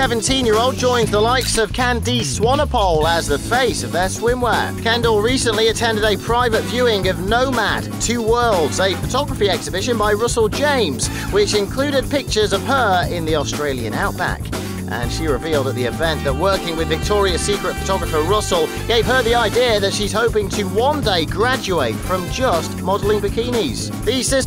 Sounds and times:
Music: 0:00.0 - 0:24.4
Speech: 0:00.0 - 0:24.4.

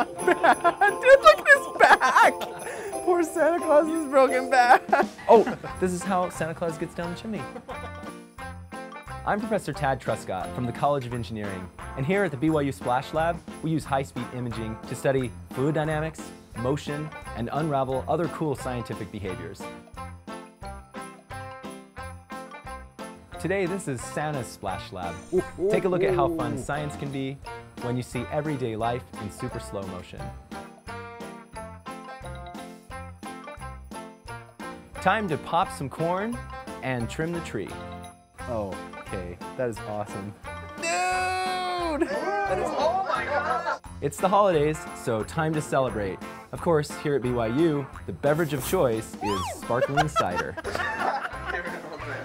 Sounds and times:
Music: 0:00.0 - 0:52.2
Speech: 0:09.3 - 0:19.6, 0:23.4 - 0:30.2, 0:38.5 - 0:40.3, 0:44.0 - 0:50.6.

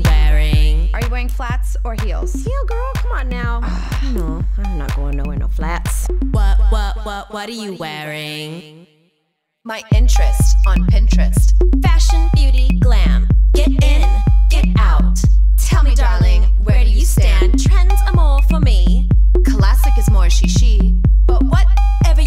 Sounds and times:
Music: 0:00.0 - 0:07.2, 0:09.7 - 0:22.2.

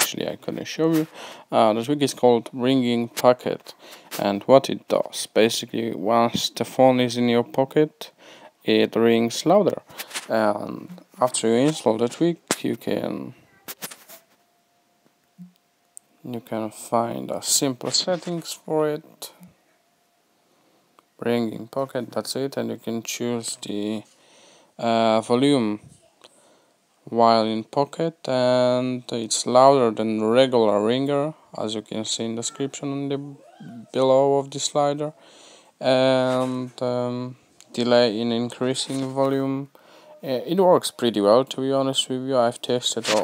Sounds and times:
Speech: 0:00.0 - 0:13.8, 0:16.2 - 0:19.5, 0:21.2 - 0:24.1, 0:24.8 - 0:26.0, 0:27.1 - 0:35.2, 0:35.8 - 0:43.2.

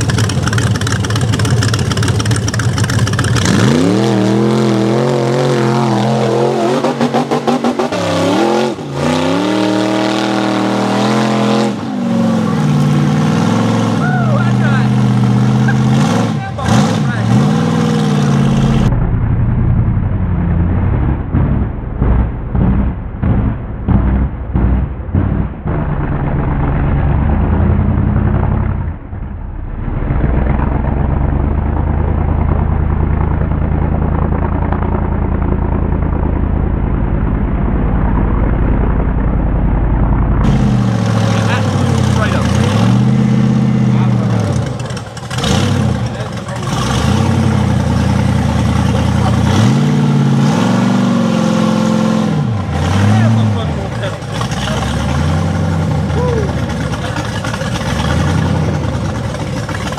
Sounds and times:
Vehicle: 0:00.0 - 0:59.9.

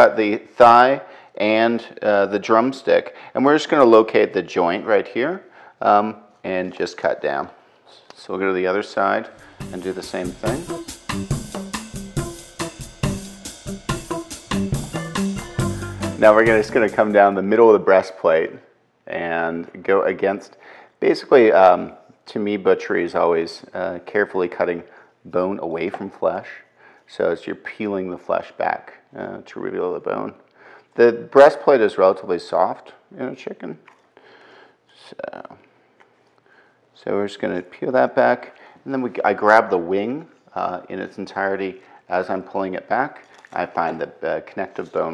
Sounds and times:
Speech: 0:00.0 - 0:10.8, 0:16.2 - 0:30.4, 0:31.0 - 0:33.9, 0:34.9 - 0:35.7, 0:37.0 - 0:45.1
Music: 0:09.4 - 0:17.4.

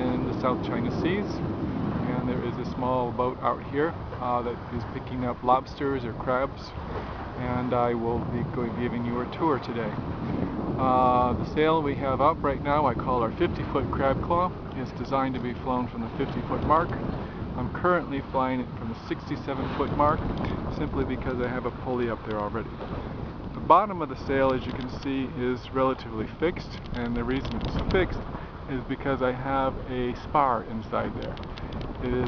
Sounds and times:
Speech: 0:00.0 - 0:01.5, 0:02.1 - 0:06.8, 0:07.4 - 0:10.0, 0:10.8 - 0:17.0, 0:17.6 - 0:22.7, 0:23.6 - 0:31.4, 0:32.0 - 0:32.2
Sailboat, sailing ship: 0:00.0 - 0:32.2.

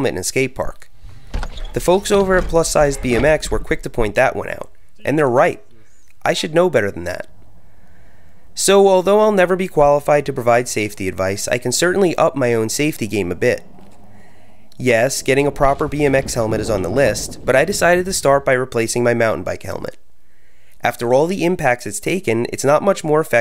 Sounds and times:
Speech: 0:00.0 - 0:00.9, 0:01.8 - 0:07.3, 0:08.6 - 0:13.6, 0:14.8 - 0:20.0, 0:20.8 - 0:23.4
Bicycle: 0:00.9 - 0:04.0, 0:11.8 - 0:19.0.

